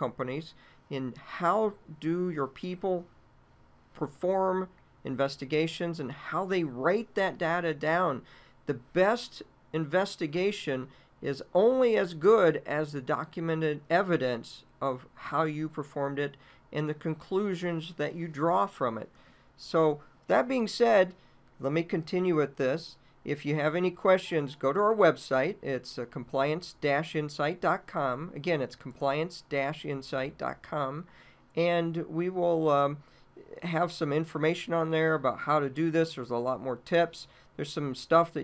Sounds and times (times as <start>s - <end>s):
Speech: 0.0s - 3.1s, 4.0s - 38.4s.